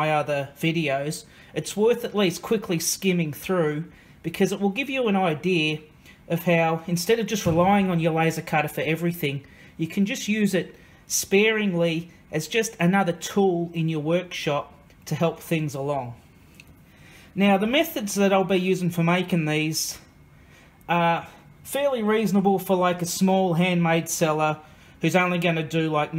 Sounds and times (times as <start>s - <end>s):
Speech: 0.0s - 16.2s, 17.4s - 20.1s, 20.9s - 26.1s.